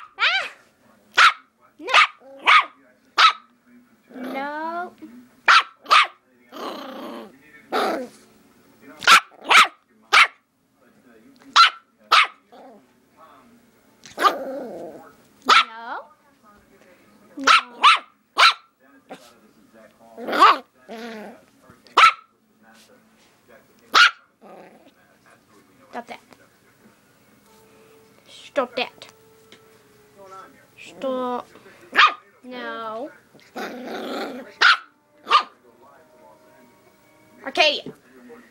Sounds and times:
Bark: 0.0 - 3.5, 5.5 - 6.2, 9.0 - 10.4, 11.5 - 12.4, 15.5 - 15.7, 17.4 - 18.7, 20.4 - 20.6, 22.0 - 22.3, 23.9 - 24.3, 31.9 - 32.2, 34.6 - 35.6
Speech: 0.6 - 9.2, 14.8 - 18.0, 18.8 - 24.0, 24.6 - 27.1, 28.2 - 29.2, 30.2 - 34.7, 35.4 - 38.5
Music: 25.3 - 38.5.

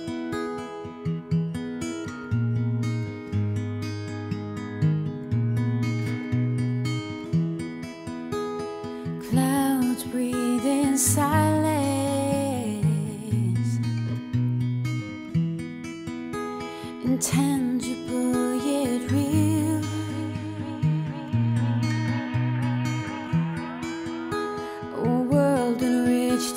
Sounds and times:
Music: 0.0 - 26.5.

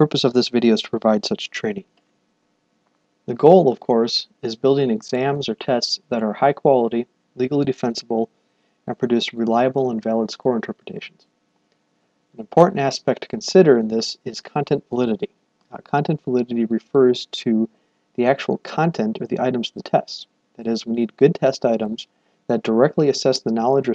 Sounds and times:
Speech: 0.0 - 1.9, 3.3 - 8.3, 8.9 - 11.2, 12.4 - 23.9.

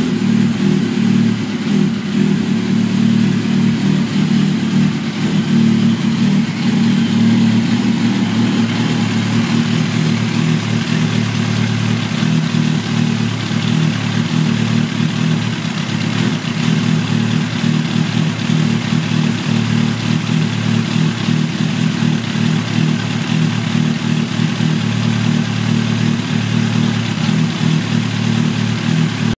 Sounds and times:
Vehicle: 0.0 - 29.3.

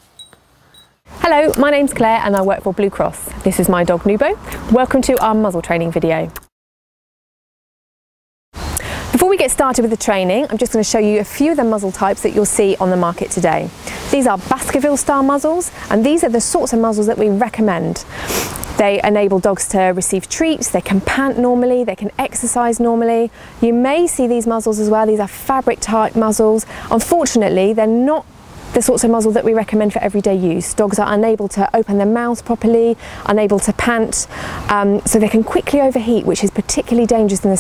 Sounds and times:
Speech: 1.2 - 6.4, 9.1 - 18.1, 18.7 - 37.6.

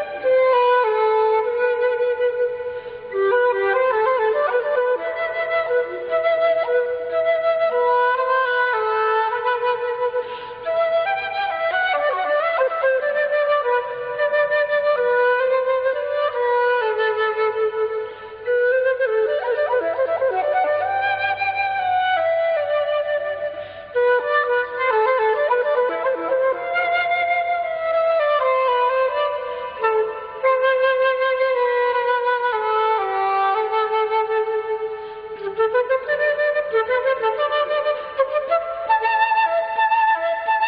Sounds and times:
Flute: 0.0 - 40.6.

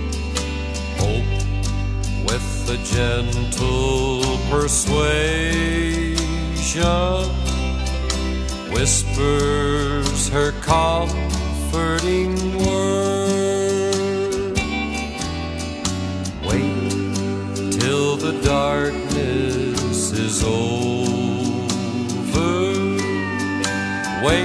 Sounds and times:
Music: 0.0 - 24.4.

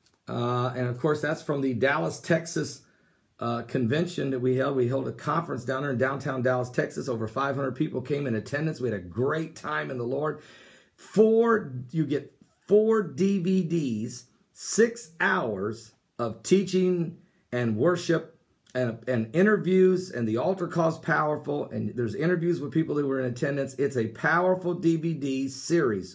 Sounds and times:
Speech: 0.3 - 10.4, 11.0 - 26.1.

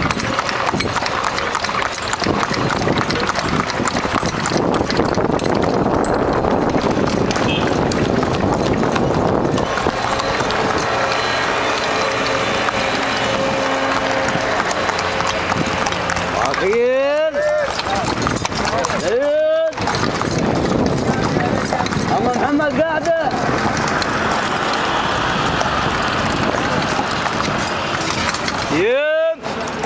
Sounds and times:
Clip-clop: 0.0 - 29.8
Speech: 16.4 - 18.1, 18.7 - 19.8, 21.2 - 23.4, 28.7 - 29.4.

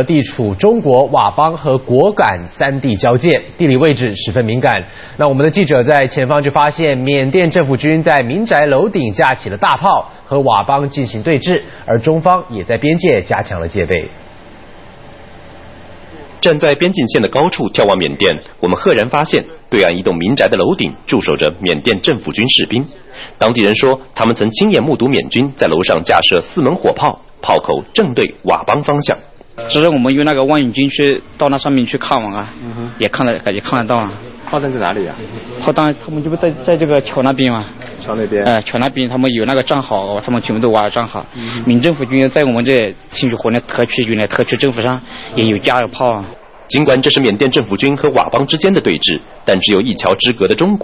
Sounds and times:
Speech: 0.0 - 14.1, 16.1 - 50.8.

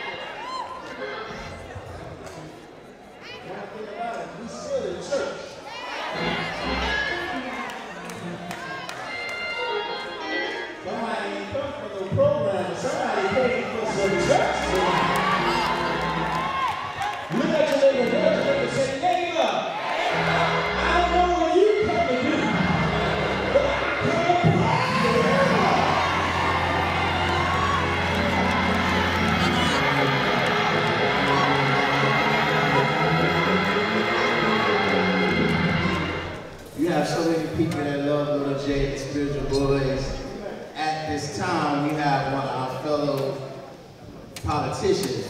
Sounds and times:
Music: 6.0 - 11.6, 13.2 - 36.8
Speech: 10.8 - 15.1, 17.3 - 19.7, 36.8 - 43.6.

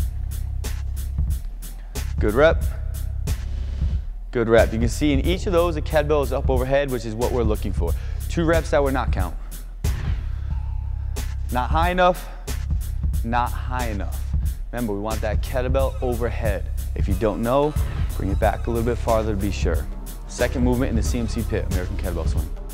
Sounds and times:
Music: 0.0 - 22.7
Speech: 2.2 - 2.6, 4.3 - 9.4, 11.5 - 12.3, 13.2 - 22.5.

